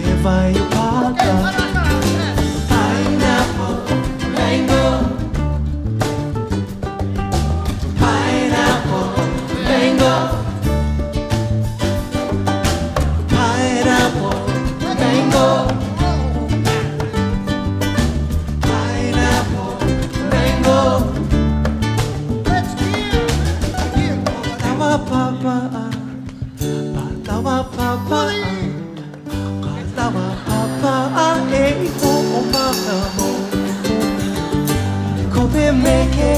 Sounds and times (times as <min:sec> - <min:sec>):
Music: 0:00.0 - 0:36.3
Singing: 0:02.3 - 0:05.3, 0:13.3 - 0:16.8, 0:18.6 - 0:21.2, 0:35.3 - 0:36.3.